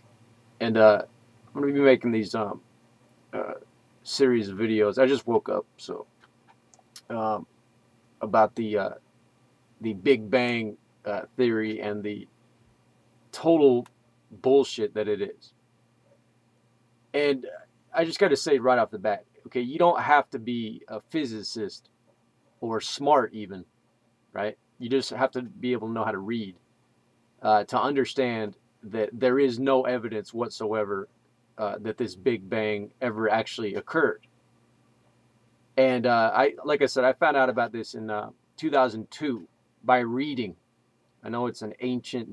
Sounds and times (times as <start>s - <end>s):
Speech: 0.6s - 2.6s, 3.4s - 6.1s, 7.0s - 7.5s, 8.2s - 9.0s, 9.8s - 12.3s, 13.4s - 15.5s, 17.2s - 21.8s, 22.6s - 23.6s, 24.4s - 26.6s, 27.4s - 34.2s, 35.8s - 40.6s, 41.2s - 42.3s.